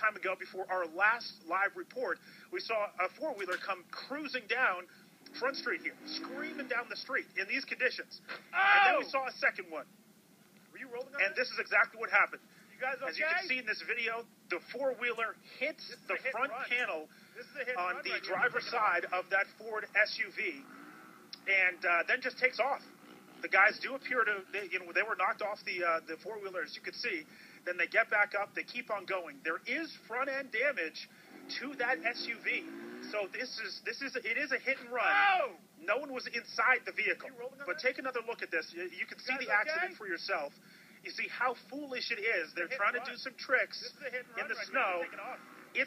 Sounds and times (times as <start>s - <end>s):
Speech: 0.0s - 9.9s, 10.8s - 20.6s, 21.4s - 45.8s.